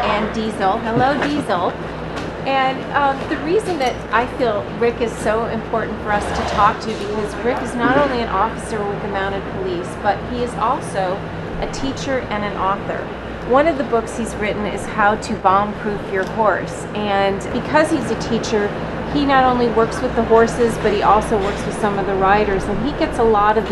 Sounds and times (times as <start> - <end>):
Speech: 0.0 - 1.8, 2.5 - 23.7.